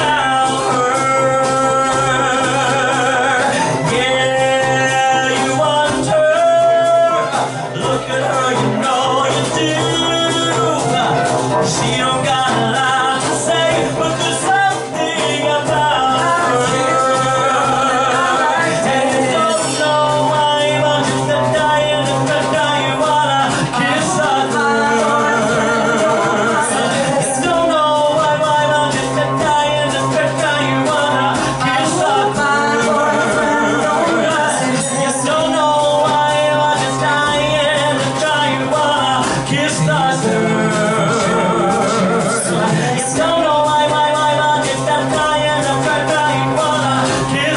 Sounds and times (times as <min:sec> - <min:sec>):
Inside, large room or hall: 0:00.0 - 0:47.5
Male singing: 0:00.0 - 0:47.5
Music: 0:00.0 - 0:47.5.